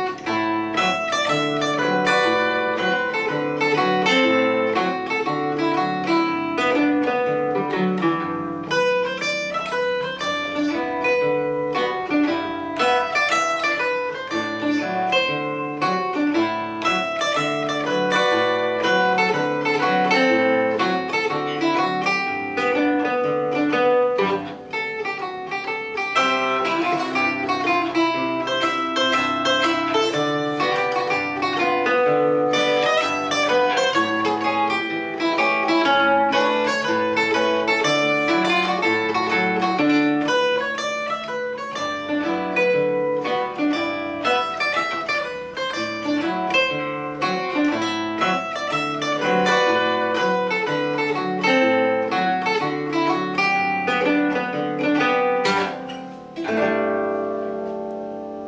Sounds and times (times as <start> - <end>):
Zither: 0.0 - 58.4.